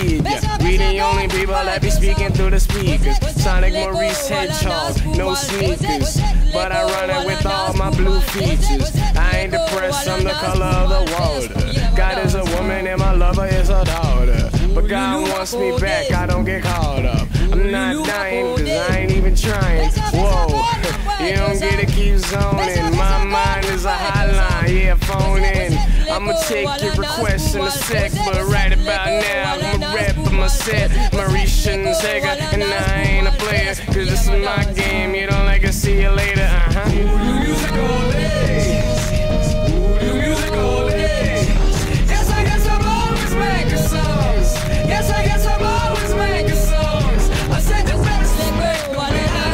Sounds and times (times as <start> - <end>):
Exciting music: 0.0 - 49.5.